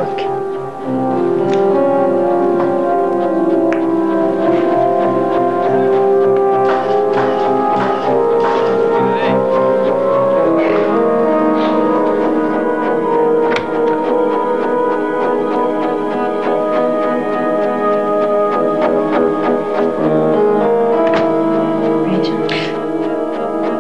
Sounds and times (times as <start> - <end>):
Tubular bells: 0.0 - 23.8.